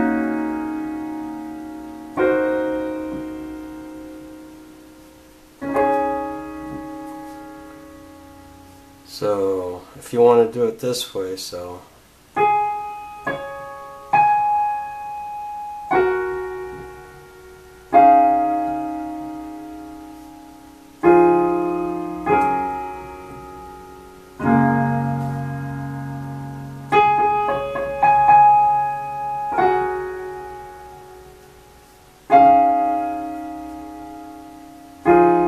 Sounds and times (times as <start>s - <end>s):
Music: 0.0s - 9.4s, 12.4s - 35.4s
Speech: 9.1s - 11.9s.